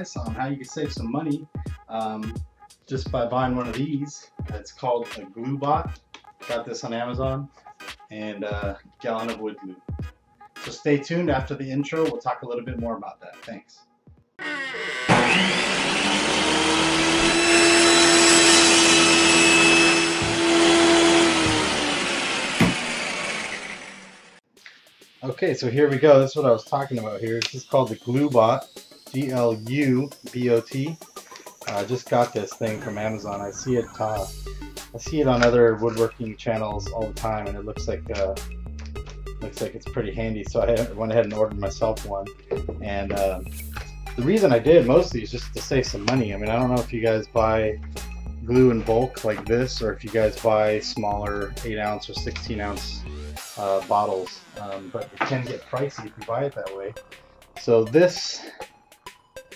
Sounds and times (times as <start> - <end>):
Power tool: 14.4 - 24.4.